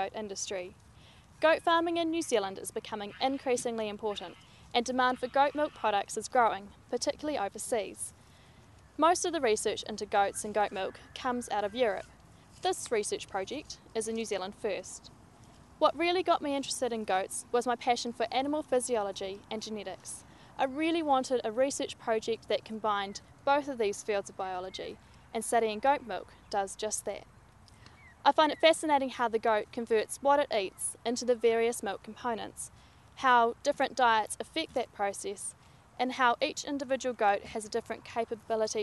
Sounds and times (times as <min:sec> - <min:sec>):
Speech: 0:00.0 - 0:00.7, 0:01.4 - 0:08.1, 0:09.0 - 0:12.0, 0:12.6 - 0:15.0, 0:15.8 - 0:27.2, 0:28.3 - 0:38.8.